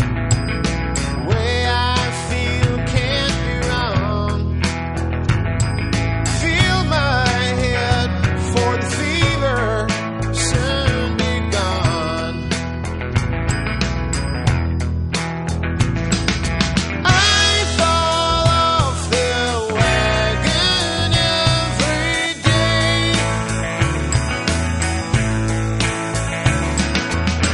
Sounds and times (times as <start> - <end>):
Music: 0.0 - 27.5.